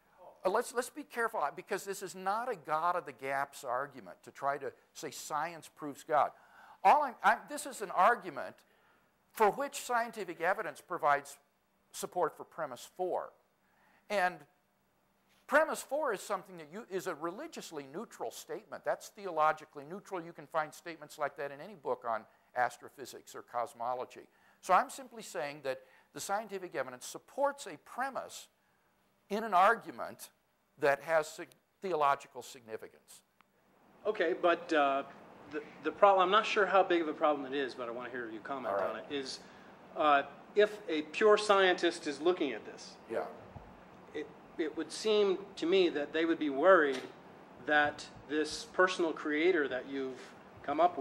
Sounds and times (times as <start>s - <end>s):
Speech: 0.2s - 8.6s, 9.4s - 11.4s, 12.0s - 13.4s, 14.1s - 14.5s, 15.5s - 28.5s, 29.3s - 33.2s, 34.1s - 39.4s, 40.0s - 43.4s, 44.1s - 51.0s.